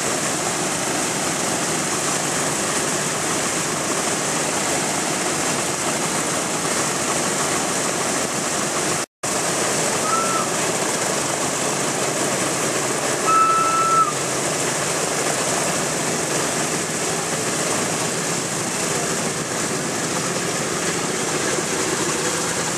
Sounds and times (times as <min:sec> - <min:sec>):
Fixed-wing aircraft, airplane: 0:06.3 - 0:22.7.